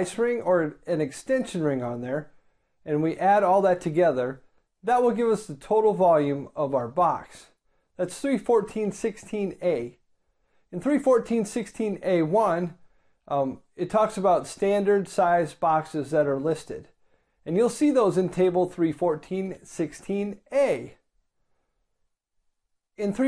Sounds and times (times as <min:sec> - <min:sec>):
Speech: 0:00.0 - 0:10.0, 0:10.7 - 0:21.0, 0:23.0 - 0:23.2.